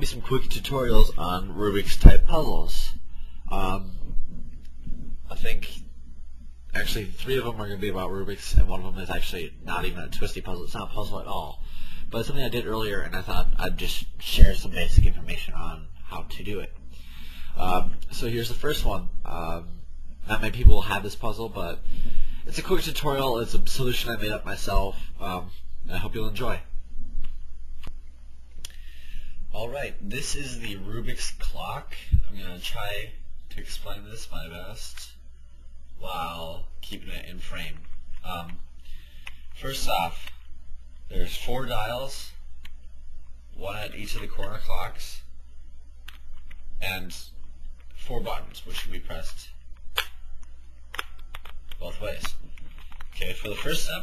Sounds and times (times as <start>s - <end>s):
Speech: 0.0s - 4.2s, 5.2s - 5.9s, 6.7s - 16.8s, 17.6s - 26.7s, 29.5s - 35.2s, 36.0s - 38.7s, 39.6s - 40.3s, 41.1s - 42.4s, 43.6s - 45.3s, 46.8s - 47.4s, 48.0s - 49.6s, 51.8s - 52.4s, 53.2s - 54.0s.